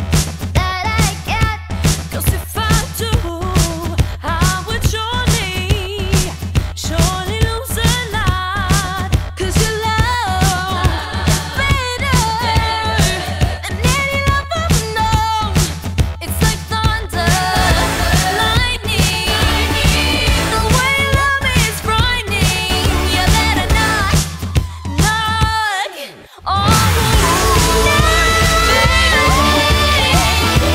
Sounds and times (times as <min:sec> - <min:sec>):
Music: 0:00.0 - 0:30.7
Female singing: 0:00.6 - 0:30.7.